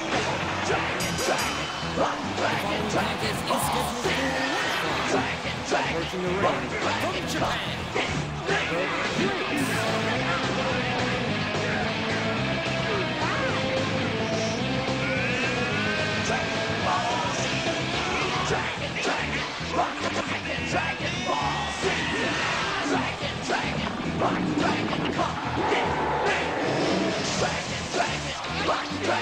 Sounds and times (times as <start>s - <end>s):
Music: 0.0s - 29.2s
Speech: 2.4s - 10.2s.